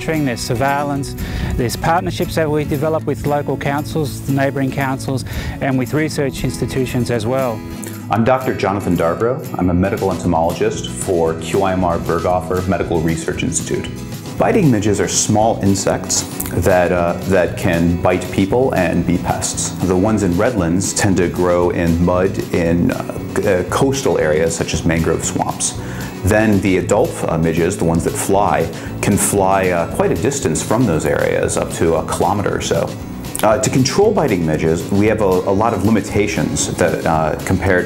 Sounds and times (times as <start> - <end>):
Music: 0.0 - 37.8
Speech: 0.0 - 37.8.